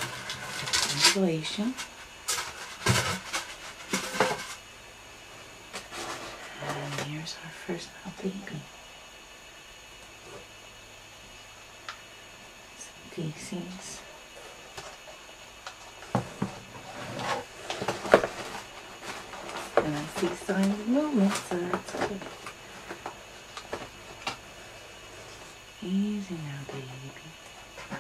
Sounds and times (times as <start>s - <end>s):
Inside, small room: 0.0s - 28.0s
Speech: 0.8s - 1.8s, 6.6s - 8.7s, 12.8s - 14.1s, 19.8s - 22.3s, 25.8s - 27.4s.